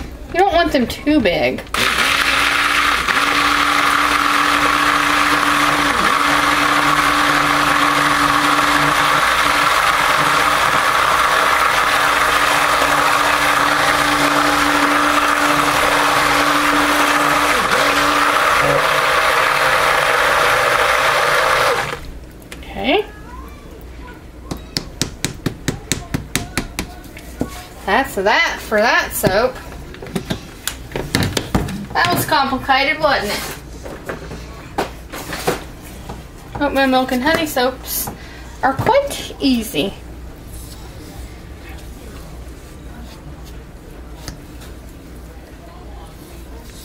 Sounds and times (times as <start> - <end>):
Blender: 1.7 - 22.0.